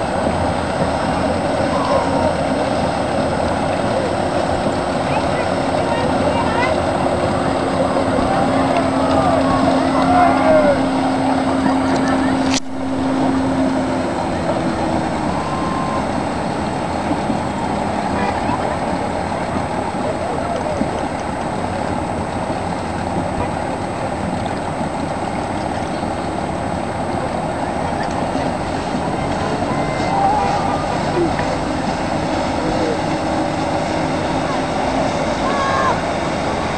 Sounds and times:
Sailboat, sailing ship: 0.0 - 36.7
Speech: 5.0 - 12.6, 18.0 - 21.0.

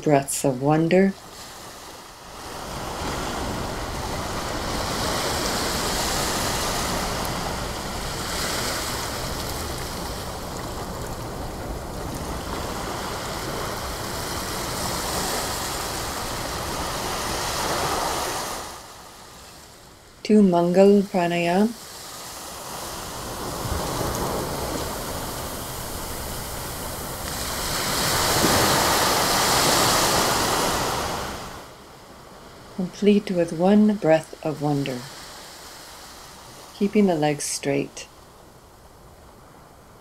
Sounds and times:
Waves, surf: 0.0 - 40.0
Wind: 0.0 - 40.0.

